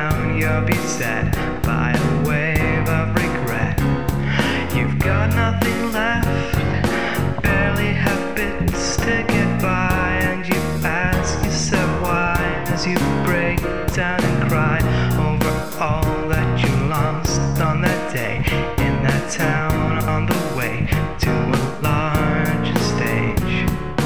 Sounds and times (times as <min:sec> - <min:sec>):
Music: 0:00.0 - 0:24.0.